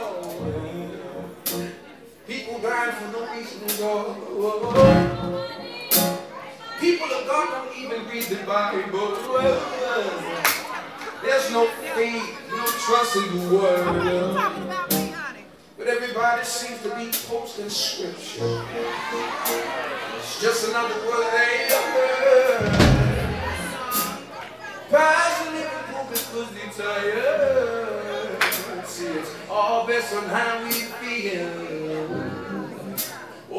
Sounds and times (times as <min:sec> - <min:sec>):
Music: 0:00.1 - 0:01.8, 0:04.6 - 0:06.3, 0:13.4 - 0:15.2, 0:18.4 - 0:19.9, 0:21.8 - 0:24.3, 0:31.8 - 0:33.2
Speech: 0:02.2 - 0:18.8.